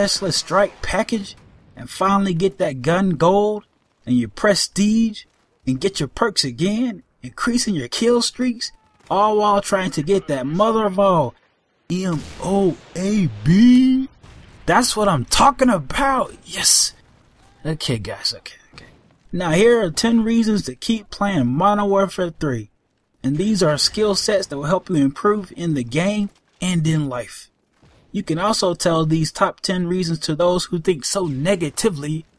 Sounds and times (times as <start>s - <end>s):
Narration, monologue: 0.0s - 32.3s.